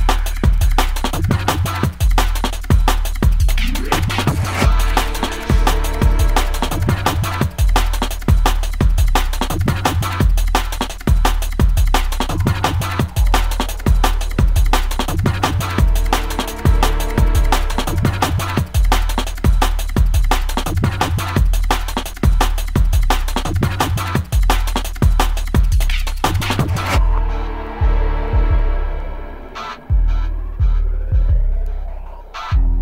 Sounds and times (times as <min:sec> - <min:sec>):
Drum and bass: 0:00.0 - 0:32.8.